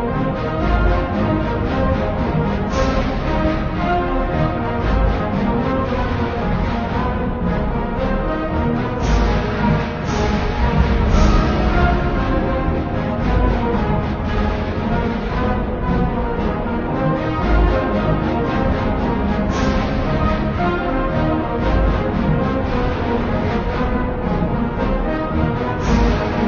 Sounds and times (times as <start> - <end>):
Music: 0.0 - 26.4.